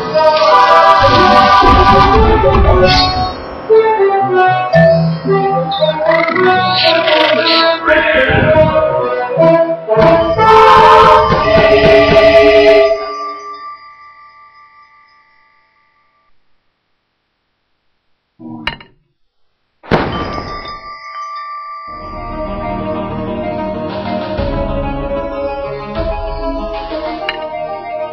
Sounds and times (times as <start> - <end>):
Music: 0.0 - 16.4, 20.2 - 28.1.